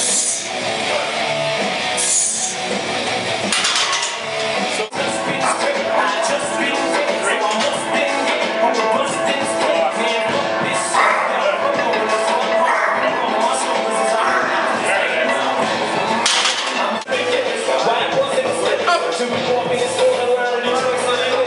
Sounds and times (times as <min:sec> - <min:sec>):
Music: 0:00.0 - 0:21.4.